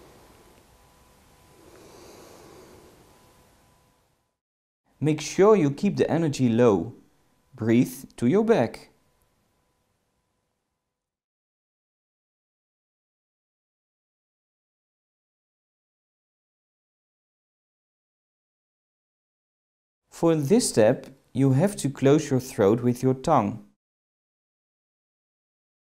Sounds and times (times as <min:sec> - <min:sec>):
Speech: 0:05.0 - 0:07.0, 0:07.6 - 0:09.0, 0:20.2 - 0:23.8.